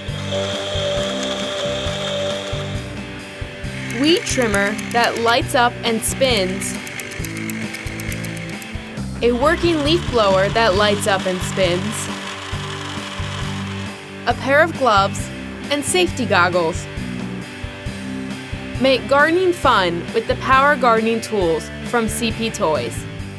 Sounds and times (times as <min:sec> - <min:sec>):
Music: 0:00.0 - 0:23.3
Speech: 0:04.0 - 0:06.8, 0:09.2 - 0:12.1, 0:14.3 - 0:16.9, 0:18.8 - 0:23.1.